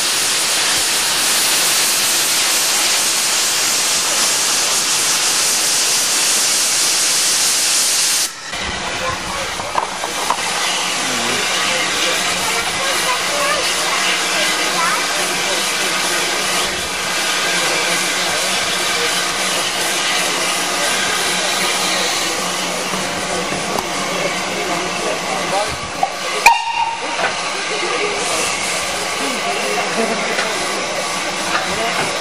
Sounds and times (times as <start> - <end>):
Hiss: 0.0 - 32.2.